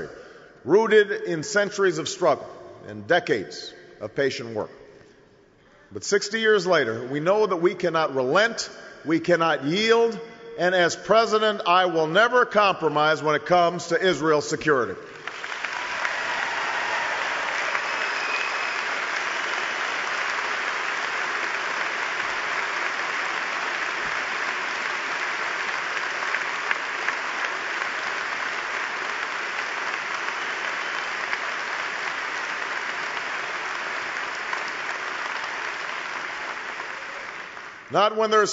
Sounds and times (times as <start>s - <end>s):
Narration, monologue: 0.0s - 15.3s, 37.9s - 38.5s
Male speech, man speaking: 0.7s - 4.7s, 6.0s - 15.0s, 37.9s - 38.5s.